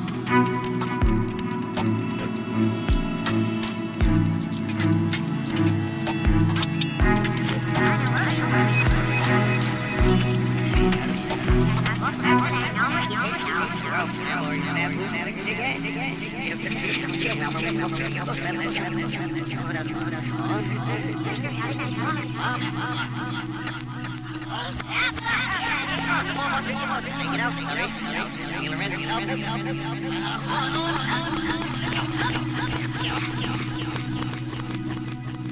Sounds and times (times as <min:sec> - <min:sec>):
Music: 0:00.0 - 0:35.5.